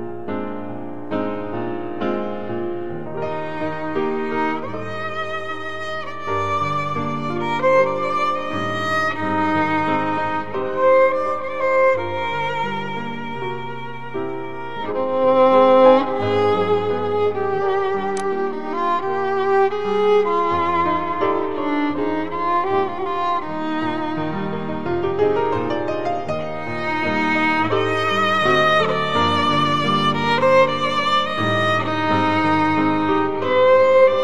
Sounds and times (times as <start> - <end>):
Violin, fiddle: 1.5 - 34.2.